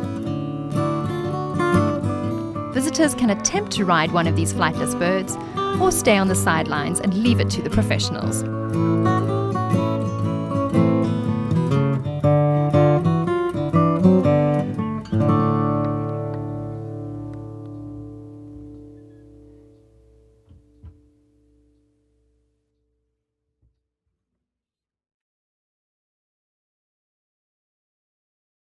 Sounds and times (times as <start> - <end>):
Acoustic guitar: 0.0 - 22.2.